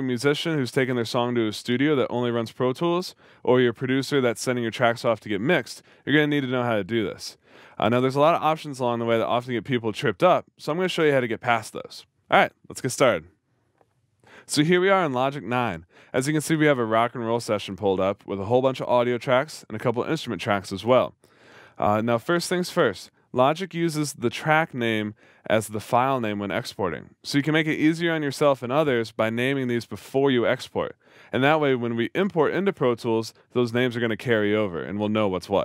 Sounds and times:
Speech: 0.0s - 13.3s, 14.4s - 21.1s, 21.8s - 35.6s.

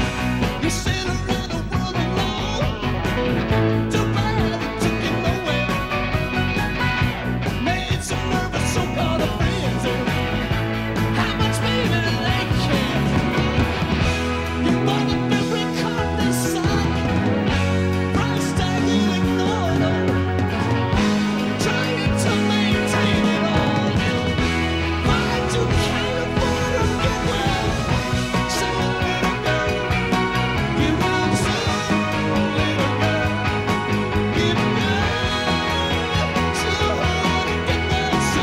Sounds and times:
Rock and roll: 0.0s - 38.4s.

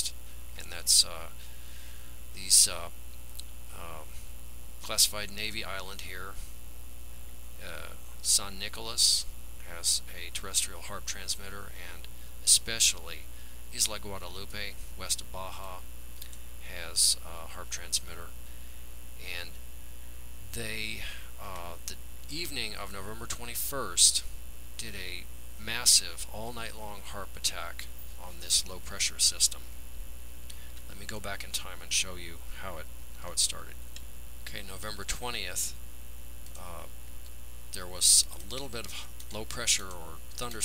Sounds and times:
Speech: 0.0s - 1.4s, 2.4s - 3.0s, 3.7s - 4.2s, 4.8s - 6.5s, 7.6s - 15.9s, 16.6s - 18.4s, 19.2s - 19.6s, 20.5s - 29.7s, 30.9s - 33.8s, 34.4s - 35.8s, 36.6s - 37.0s, 37.7s - 40.6s.

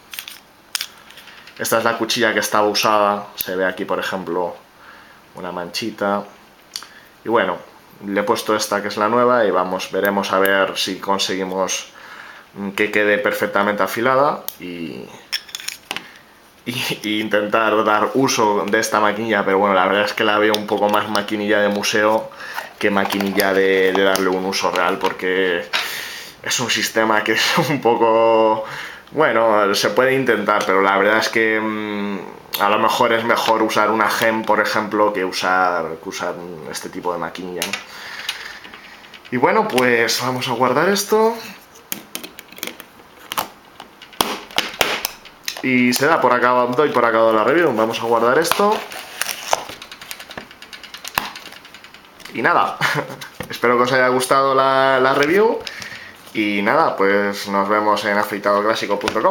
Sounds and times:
Speech: 1.6s - 4.6s, 5.4s - 6.4s, 7.2s - 12.0s, 12.6s - 15.2s, 16.6s - 25.8s, 26.4s - 37.8s, 39.3s - 41.6s, 45.6s - 48.9s, 52.3s - 55.7s, 56.3s - 59.3s.

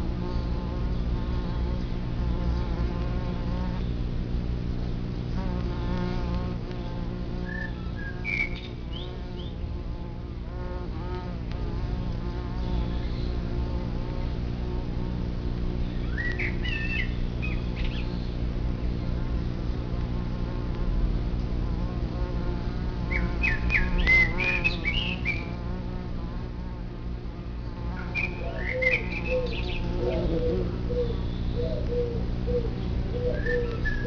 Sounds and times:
Bee, wasp, etc.: 0.0s - 34.0s
Fly, housefly: 0.0s - 34.0s.

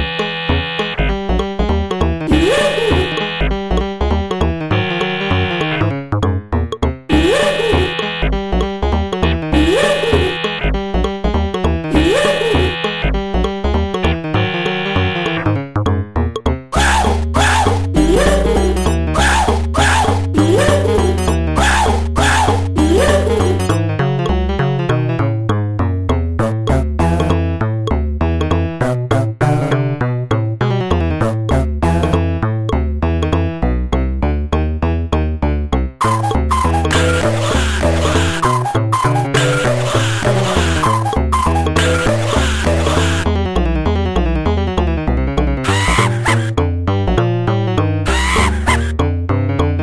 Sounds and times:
Music: 0.0s - 49.8s.

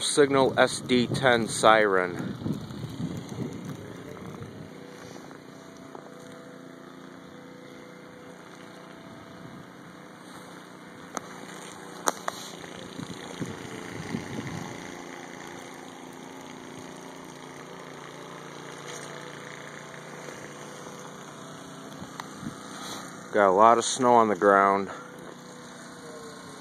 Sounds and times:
Vehicle: 0.0s - 26.6s.

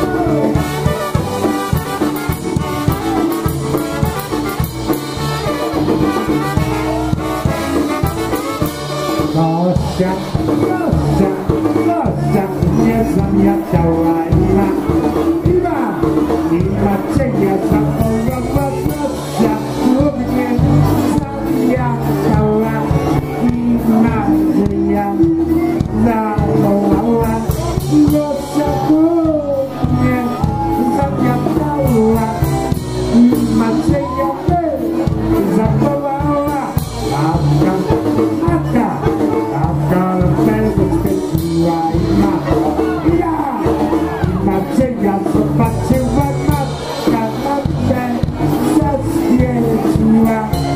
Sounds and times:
Music: 0.0s - 50.7s.

